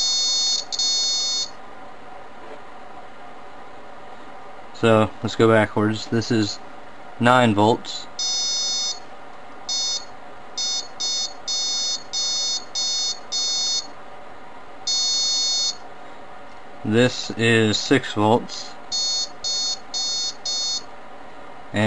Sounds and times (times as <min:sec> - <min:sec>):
Buzzer: 0:00.0 - 0:01.6, 0:08.2 - 0:09.0, 0:09.7 - 0:13.9, 0:14.9 - 0:15.8, 0:18.9 - 0:20.9
Speech: 0:04.8 - 0:06.6, 0:07.2 - 0:08.2, 0:16.8 - 0:18.8.